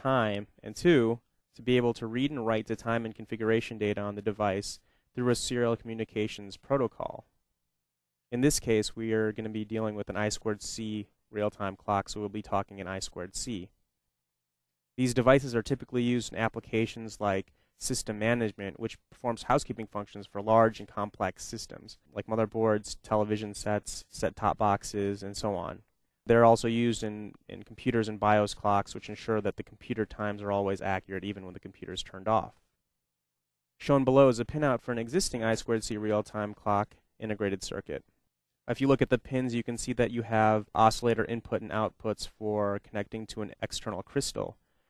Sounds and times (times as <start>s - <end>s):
Speech: 0.0s - 7.3s, 8.4s - 13.8s, 15.0s - 32.6s, 33.8s - 38.1s, 38.7s - 44.6s.